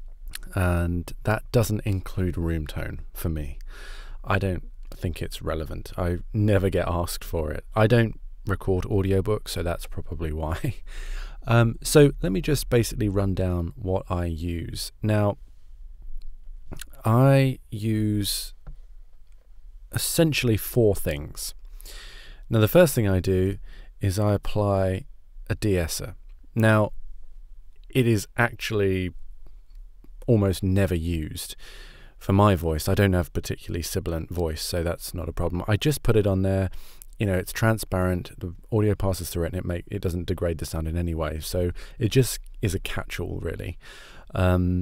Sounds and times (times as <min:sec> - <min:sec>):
Speech: 0:00.4 - 0:03.6, 0:04.2 - 0:10.8, 0:11.4 - 0:15.4, 0:16.8 - 0:18.6, 0:19.9 - 0:21.6, 0:22.5 - 0:26.9, 0:27.9 - 0:29.1, 0:30.2 - 0:31.6, 0:32.2 - 0:44.8.